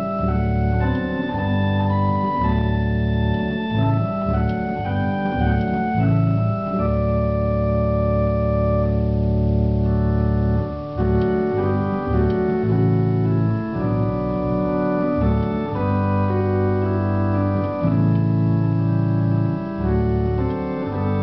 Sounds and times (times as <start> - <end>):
Hammond organ: 0.0 - 21.2.